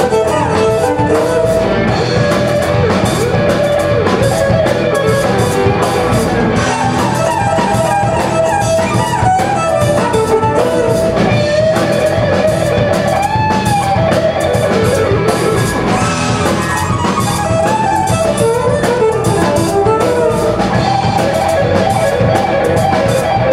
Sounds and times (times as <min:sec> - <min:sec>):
Violin, fiddle: 0:00.0 - 0:02.7, 0:04.2 - 0:11.8, 0:16.4 - 0:21.5
Electric guitar: 0:00.0 - 0:23.5
Strum: 0:00.0 - 0:23.5.